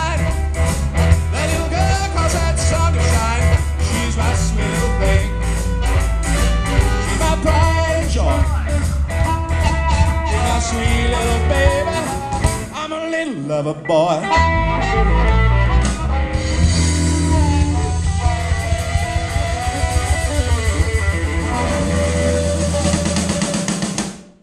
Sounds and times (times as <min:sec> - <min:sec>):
Blues: 0:00.0 - 0:24.4
Ska: 0:00.0 - 0:24.4
Singing: 0:01.4 - 0:05.3, 0:10.2 - 0:12.2.